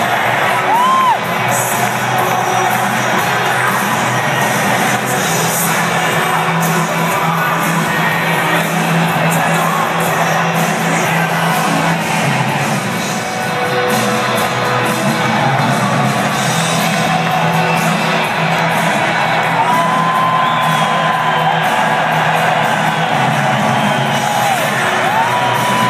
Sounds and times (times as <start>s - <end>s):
Cheering: 0.0s - 25.9s
Music: 0.0s - 25.9s.